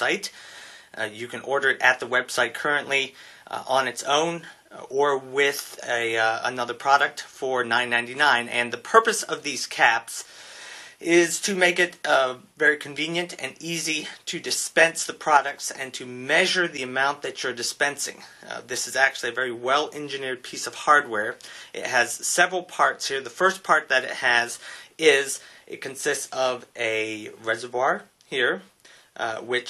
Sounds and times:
Speech: 0.0 - 0.4, 1.0 - 10.3, 11.0 - 29.7.

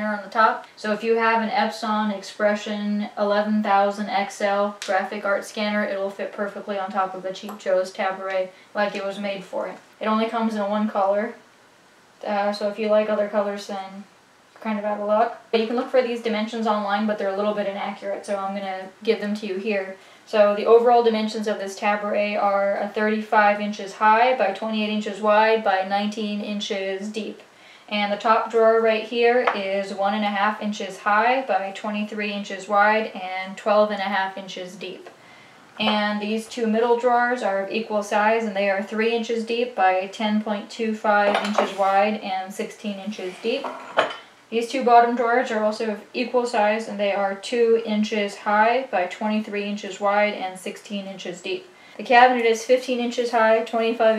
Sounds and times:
Speech: 0.0 - 11.4, 12.2 - 35.1, 35.8 - 43.8, 44.5 - 54.1.

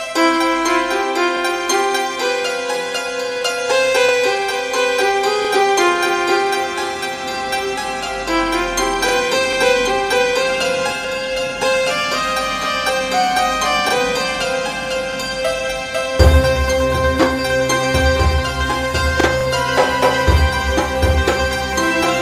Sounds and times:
Harpsichord: 0.0 - 22.2.

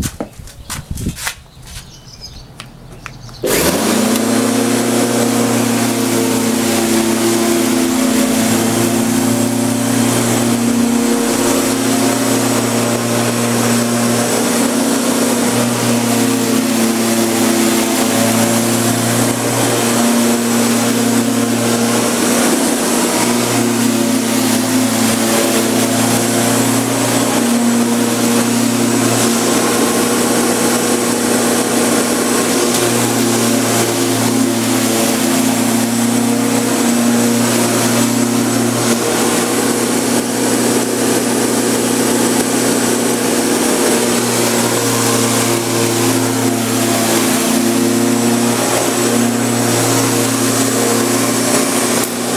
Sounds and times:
Vehicle: 0.0 - 52.3
Lawn mower: 1.2 - 52.3.

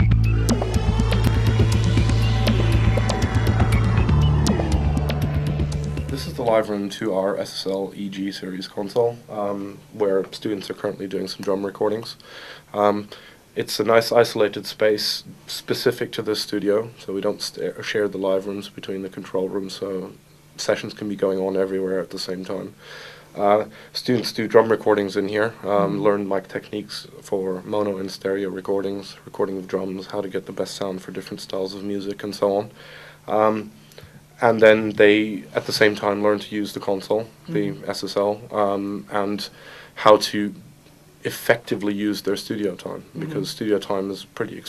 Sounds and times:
Speech: 6.1 - 22.8, 23.4 - 32.7, 33.3 - 33.7, 34.4 - 44.6.

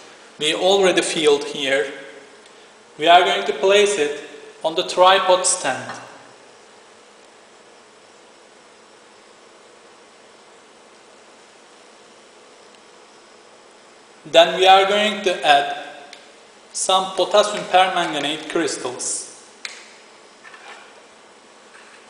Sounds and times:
Speech: 0.4 - 2.1, 3.0 - 6.2, 14.3 - 15.9, 16.8 - 19.4.

